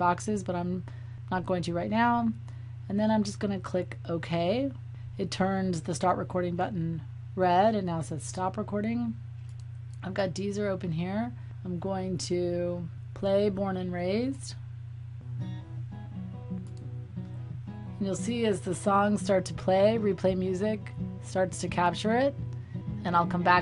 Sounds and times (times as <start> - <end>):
Speech: 0.0 - 9.2, 10.0 - 14.6, 18.0 - 22.4, 23.0 - 23.6.